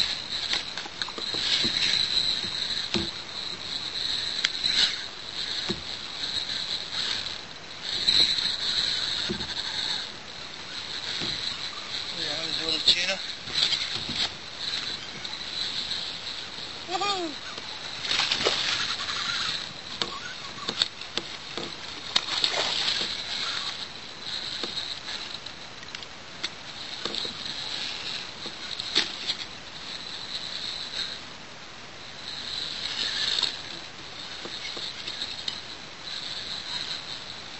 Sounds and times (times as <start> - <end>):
Rowboat, canoe, kayak: 0.0 - 37.5
Speech: 12.2 - 13.2, 16.9 - 17.4.